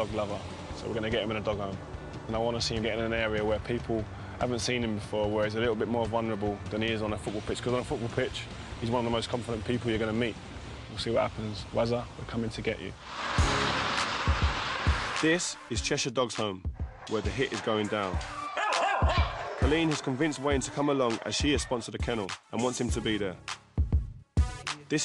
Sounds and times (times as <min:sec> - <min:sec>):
Music: 0:00.0 - 0:11.3, 0:13.1 - 0:25.0
Speech: 0:00.0 - 0:13.0, 0:15.2 - 0:18.2, 0:19.6 - 0:23.4
Rustling leaves: 0:07.4 - 0:15.3.